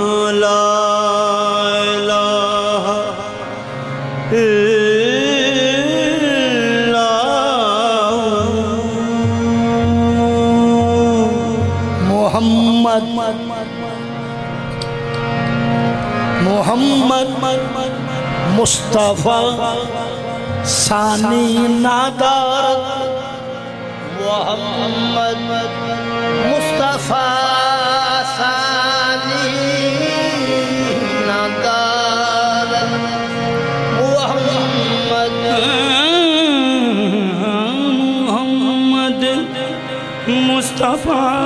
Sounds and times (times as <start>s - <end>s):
Music: 0.0s - 41.4s.